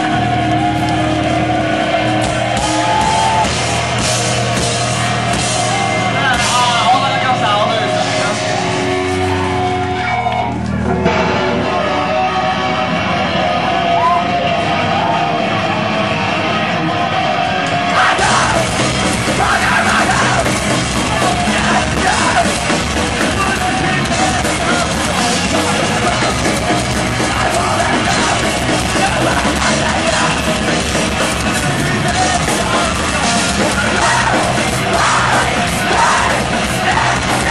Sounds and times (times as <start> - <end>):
Music: 0.0 - 37.5.